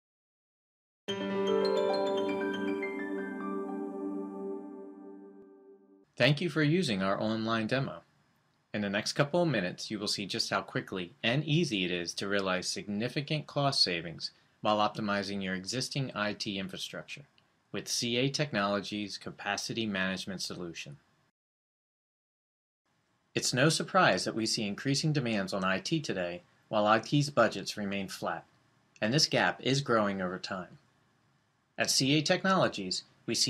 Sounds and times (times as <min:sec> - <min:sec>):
Vibraphone: 0:01.1 - 0:05.0
Speech: 0:06.2 - 0:08.1, 0:08.8 - 0:21.0, 0:23.4 - 0:30.8, 0:31.8 - 0:33.4.